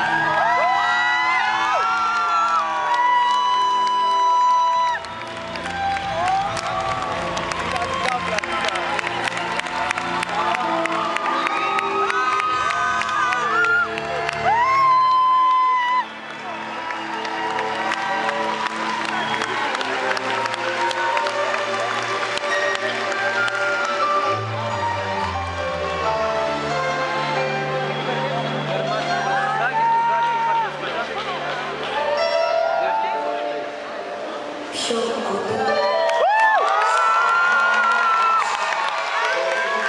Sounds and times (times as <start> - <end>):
Music: 0.0 - 39.8.